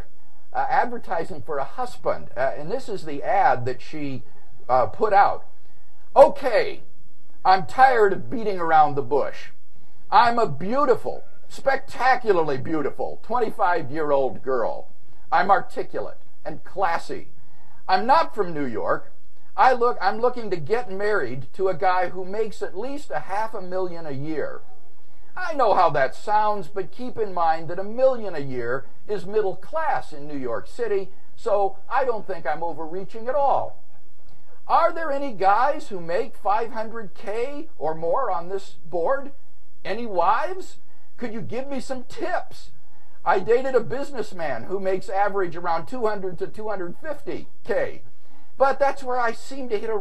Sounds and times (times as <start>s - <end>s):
Speech: 0.6s - 5.4s, 6.2s - 6.8s, 7.4s - 17.3s, 17.9s - 24.6s, 25.4s - 33.8s, 34.7s - 50.0s.